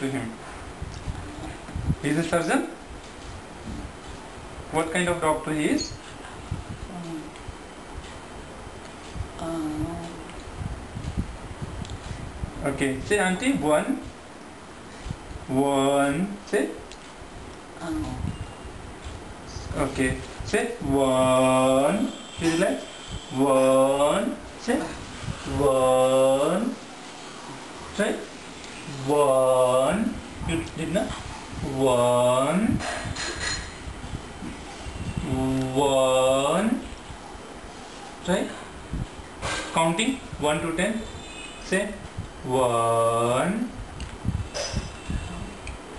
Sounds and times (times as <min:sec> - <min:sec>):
Male speech, man speaking: 0:00.0 - 0:00.4, 0:02.0 - 0:02.8, 0:04.8 - 0:06.0, 0:12.6 - 0:14.1, 0:15.5 - 0:16.8, 0:19.5 - 0:26.8, 0:28.0 - 0:28.3, 0:28.9 - 0:32.8, 0:35.2 - 0:36.9, 0:38.2 - 0:38.7, 0:39.7 - 0:43.8.